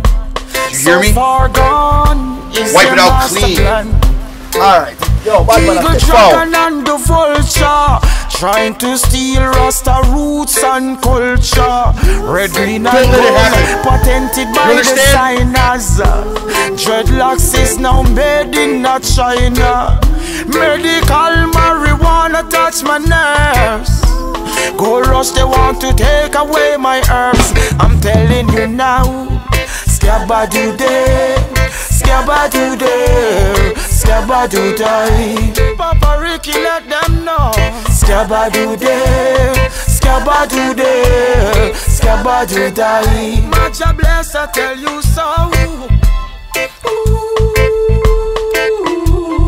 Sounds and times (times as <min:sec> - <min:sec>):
Music: 0:00.0 - 0:49.4
Speech: 0:00.7 - 0:01.4, 0:02.6 - 0:03.9, 0:04.6 - 0:06.6, 0:12.3 - 0:15.7, 0:24.8 - 0:28.8.